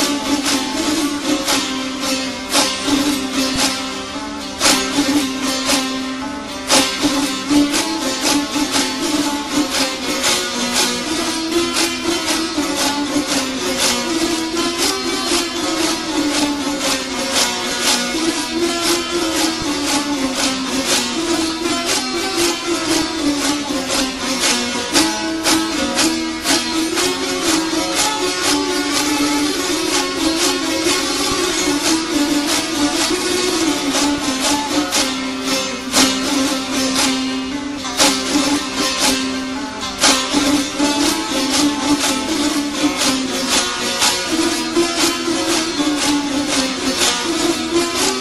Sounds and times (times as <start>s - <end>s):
Music: 0.0s - 48.2s.